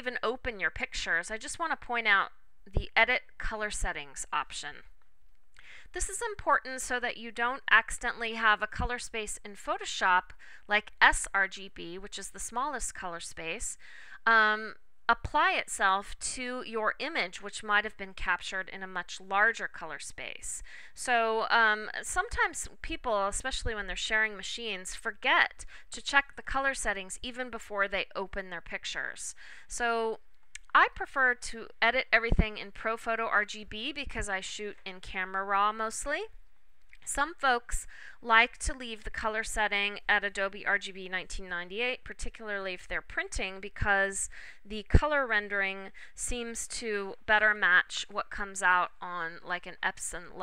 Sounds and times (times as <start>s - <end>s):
Speech: 0.0s - 4.9s, 5.9s - 36.4s, 37.0s - 50.4s.